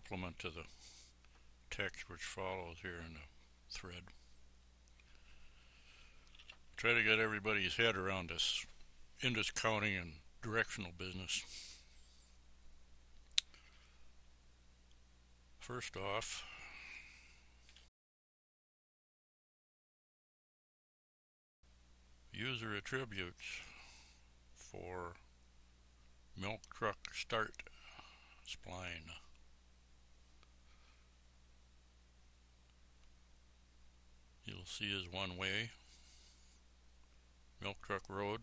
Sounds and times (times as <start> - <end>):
Speech: 0.0 - 0.8, 1.7 - 4.2, 6.8 - 11.7, 15.6 - 16.6, 22.3 - 23.8, 24.6 - 25.3, 26.4 - 27.7, 28.4 - 29.3, 34.4 - 35.8, 37.6 - 38.4.